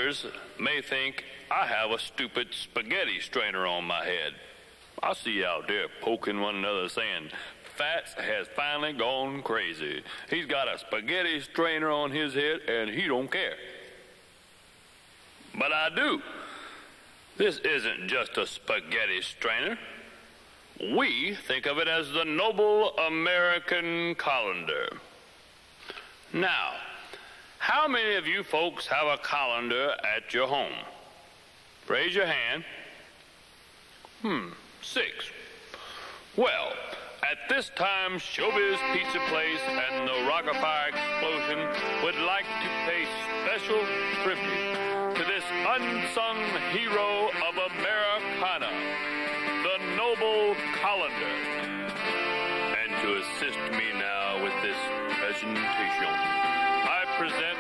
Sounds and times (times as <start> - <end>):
Speech: 0.0 - 4.4, 5.0 - 13.8, 15.5 - 16.4, 17.4 - 20.2, 20.8 - 25.0, 26.3 - 27.0, 27.6 - 31.0, 31.9 - 33.0, 34.2 - 35.4, 36.4 - 48.8, 49.6 - 51.4, 52.7 - 57.6.